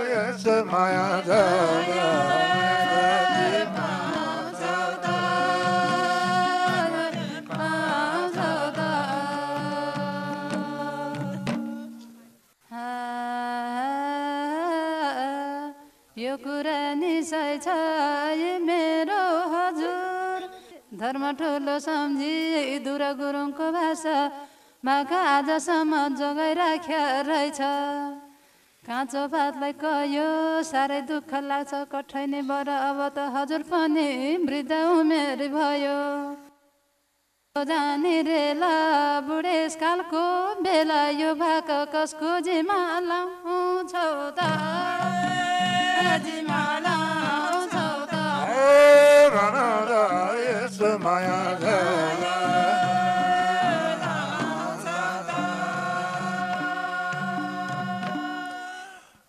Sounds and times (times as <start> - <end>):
Female singing: 0.0 - 11.8, 12.7 - 36.5, 37.6 - 59.0
Choir: 0.0 - 11.9, 44.0 - 59.2.